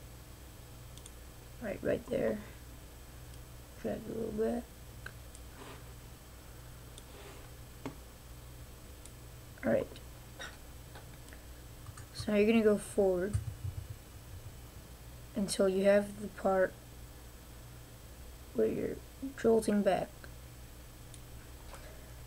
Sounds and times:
Speech: 0:01.6 - 0:02.6, 0:03.8 - 0:04.7, 0:09.6 - 0:10.0, 0:12.2 - 0:13.4, 0:15.4 - 0:16.8, 0:18.6 - 0:20.2.

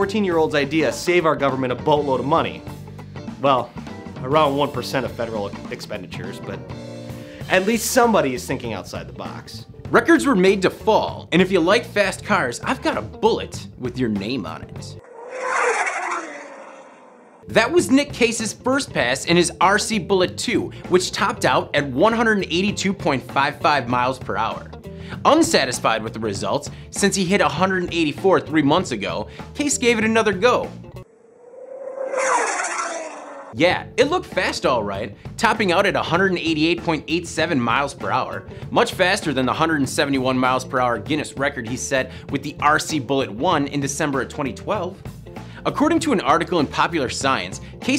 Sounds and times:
Speech: 0:00.0 - 0:02.7, 0:03.4 - 0:06.6, 0:07.5 - 0:15.0, 0:17.5 - 0:30.7, 0:33.6 - 0:45.0, 0:45.6 - 0:47.9
Music: 0:00.0 - 0:15.0, 0:17.4 - 0:31.1, 0:33.5 - 0:47.9.

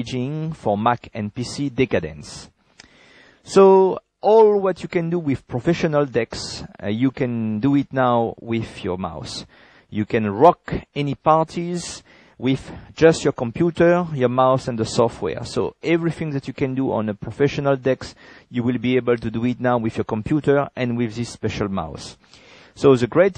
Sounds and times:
Speech: 0:00.0 - 0:02.6, 0:03.5 - 0:22.2, 0:22.8 - 0:23.3.

